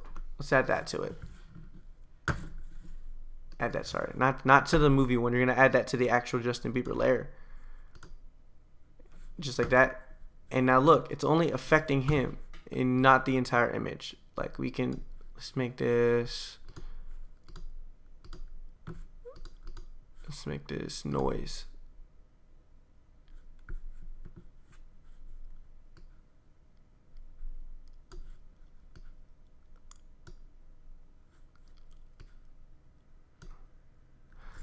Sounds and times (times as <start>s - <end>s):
Inside, small room: 0.0s - 34.6s
Speech: 0.4s - 1.2s, 3.6s - 7.3s, 9.4s - 16.7s, 20.2s - 21.8s.